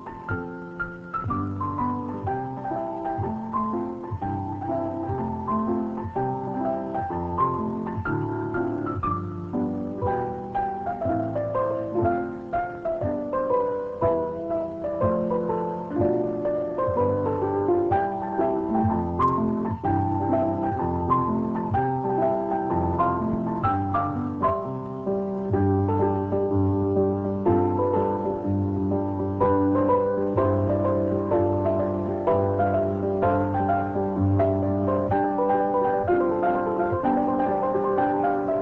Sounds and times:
Music: 0.0 - 38.6.

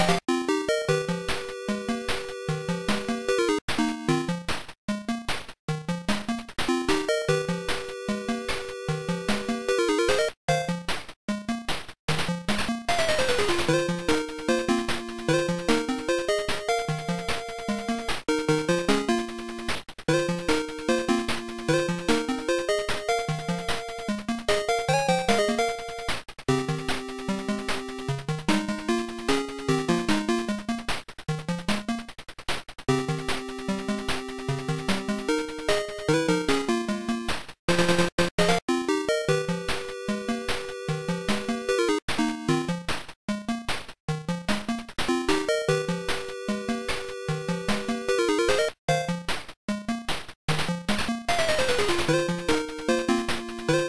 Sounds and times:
Video game music: 0.0 - 32.2, 32.9 - 53.8.

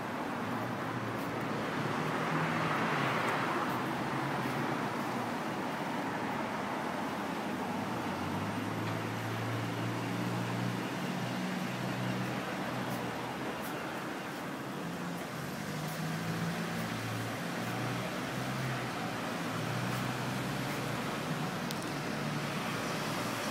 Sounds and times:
Traffic noise, roadway noise: 0.0 - 23.5.

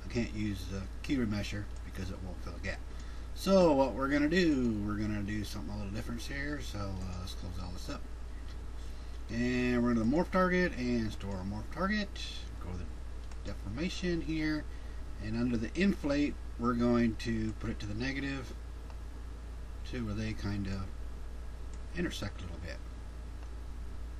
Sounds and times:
Speech: 0.0 - 8.0, 9.3 - 18.6, 19.8 - 21.0, 21.9 - 22.8.

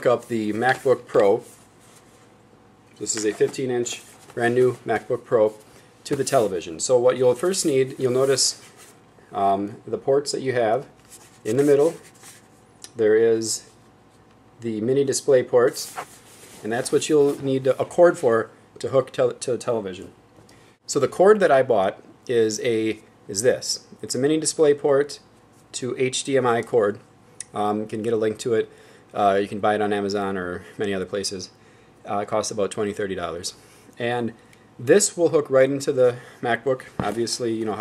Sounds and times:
Speech: 0.0 - 1.5, 3.0 - 8.6, 9.3 - 12.0, 12.9 - 13.8, 14.6 - 16.0, 16.6 - 20.2, 20.9 - 37.8.

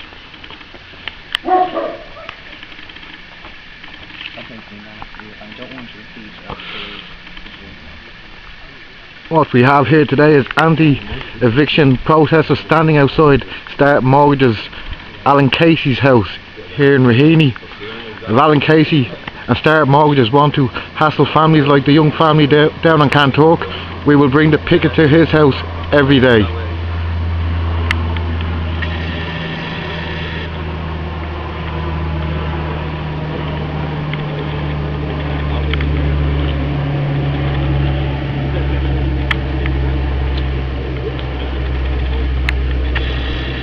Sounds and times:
Speech: 4.3 - 26.8.

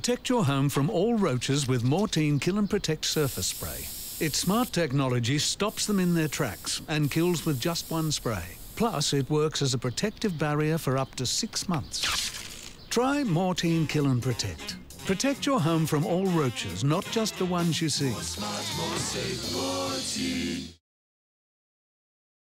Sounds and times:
Speech: 0.0 - 12.0, 12.9 - 19.1
Music: 13.2 - 20.8.

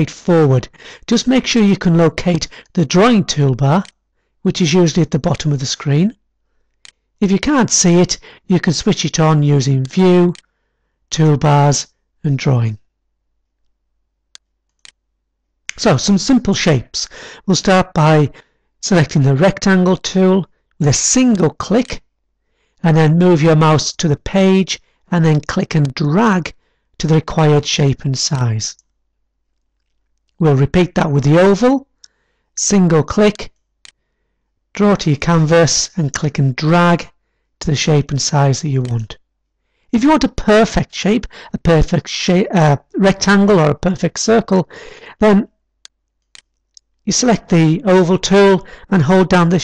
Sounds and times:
Speech: 0.0 - 6.2, 7.2 - 10.4, 11.1 - 12.9, 15.7 - 22.1, 22.8 - 28.9, 30.4 - 31.9, 32.6 - 33.6, 34.8 - 39.2, 39.9 - 45.5, 47.1 - 49.6.

